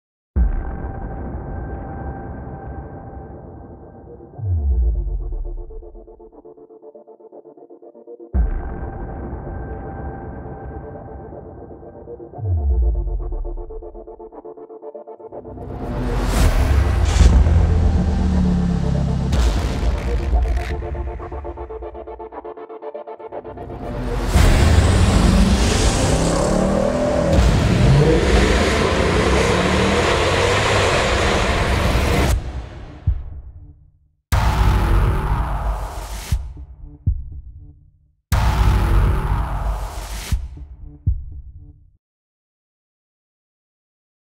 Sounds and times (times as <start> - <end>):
Music: 0.4 - 30.5, 31.6 - 42.0.